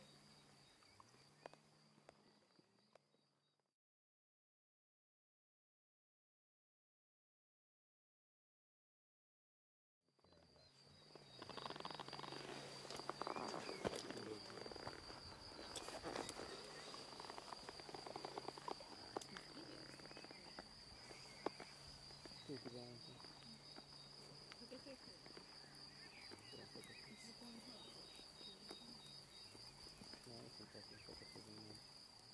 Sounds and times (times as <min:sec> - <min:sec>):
Outside, rural or natural: 0:00.0 - 0:03.7, 0:10.1 - 0:32.3
Snake: 0:10.2 - 0:32.3.